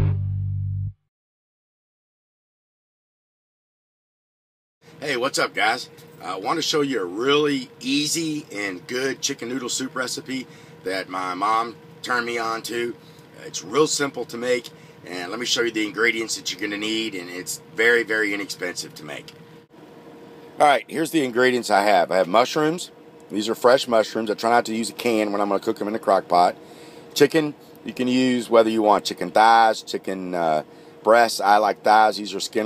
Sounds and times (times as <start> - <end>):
Speech: 5.0 - 19.4, 20.6 - 26.6, 27.2 - 32.6.